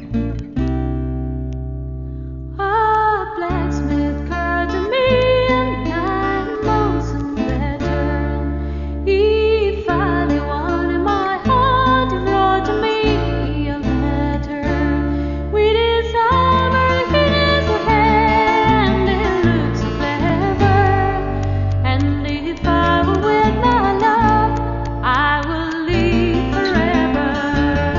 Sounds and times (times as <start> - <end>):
Music: 0.0 - 27.9.